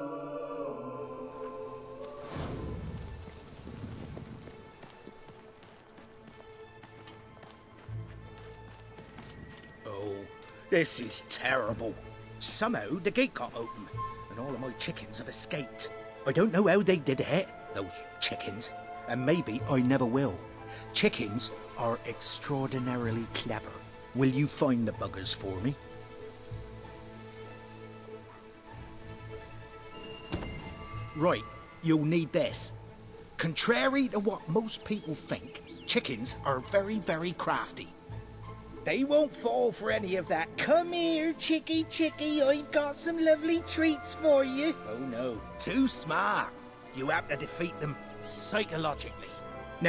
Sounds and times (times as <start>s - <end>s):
Music: 0.0s - 49.8s
Speech: 9.8s - 20.4s, 21.0s - 25.8s, 31.2s - 32.7s, 33.4s - 37.9s, 38.9s - 49.8s.